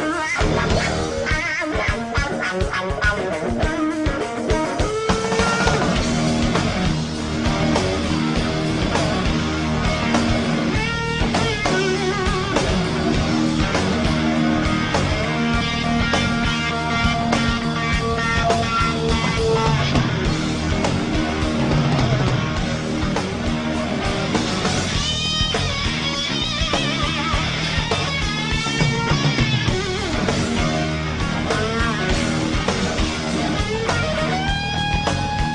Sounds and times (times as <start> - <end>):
Electric guitar: 0.0 - 35.5.